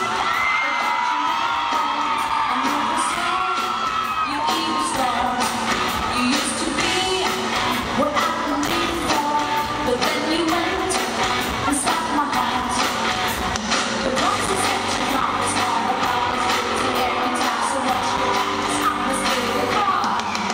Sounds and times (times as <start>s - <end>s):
Music: 0.0s - 20.5s.